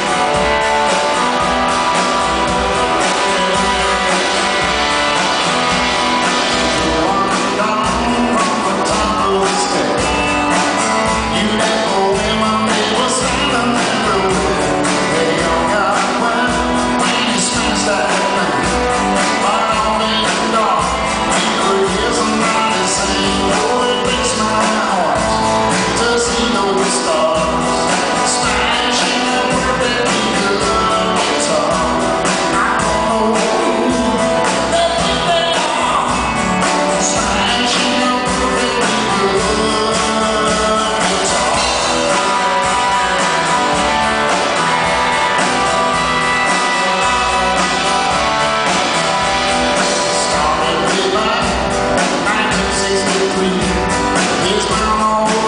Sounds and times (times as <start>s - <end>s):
Electric guitar: 0.0s - 55.4s.